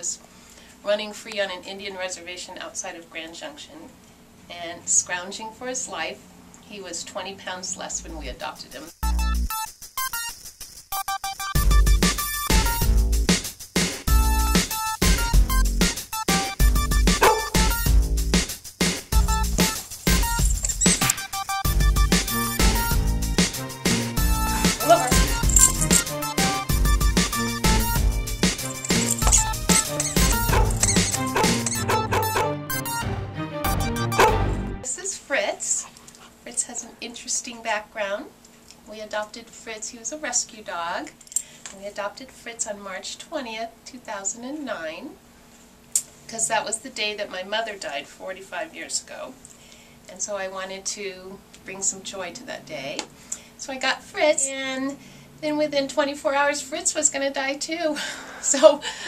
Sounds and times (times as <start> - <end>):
Speech: 0.8 - 8.9, 24.8 - 25.4, 34.9 - 35.9, 36.5 - 41.1, 41.7 - 45.2, 46.3 - 49.4, 50.1 - 58.8
Music: 7.8 - 34.9
Bow-wow: 17.2 - 17.7, 30.1 - 32.6, 34.1 - 34.5.